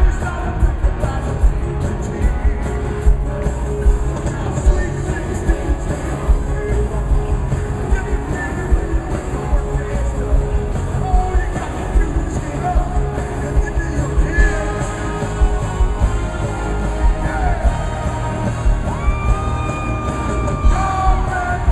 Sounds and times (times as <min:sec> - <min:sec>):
Rock and roll: 0:00.0 - 0:21.7.